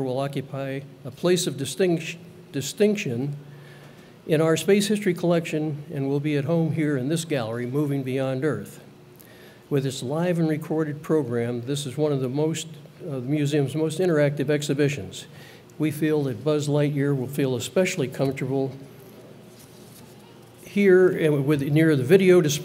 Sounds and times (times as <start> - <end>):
Speech: 0.0 - 3.4, 4.3 - 8.9, 9.7 - 18.9, 20.0 - 22.6.